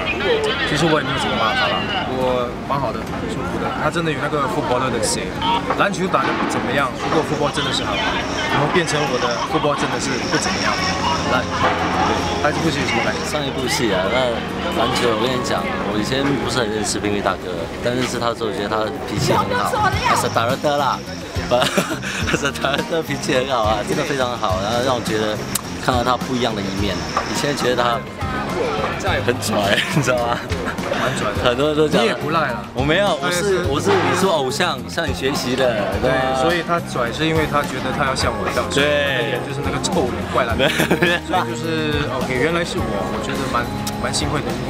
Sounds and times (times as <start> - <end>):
Speech: 0.0 - 21.7, 22.3 - 30.5, 31.1 - 44.7
Music: 0.0 - 44.7.